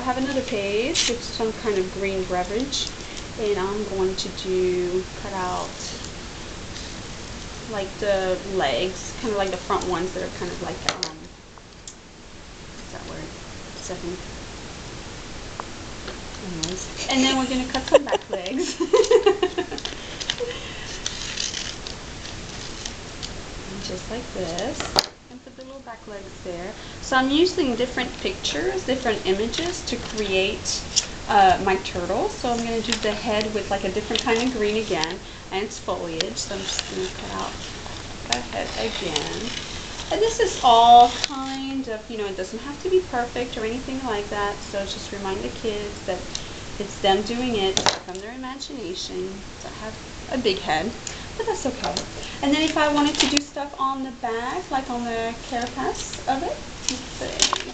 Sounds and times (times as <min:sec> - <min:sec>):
Speech: 0:00.0 - 0:06.0, 0:07.7 - 0:11.3, 0:12.9 - 0:14.2, 0:16.4 - 0:19.8, 0:23.7 - 0:37.7, 0:38.3 - 0:57.7.